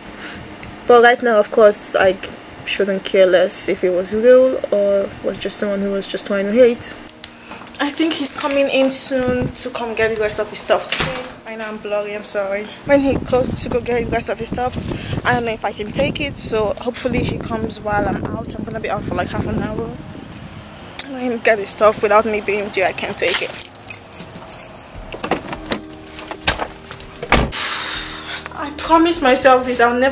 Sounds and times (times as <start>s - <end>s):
Speech: 0.9s - 7.0s, 7.8s - 20.0s, 21.0s - 23.6s, 28.5s - 30.1s.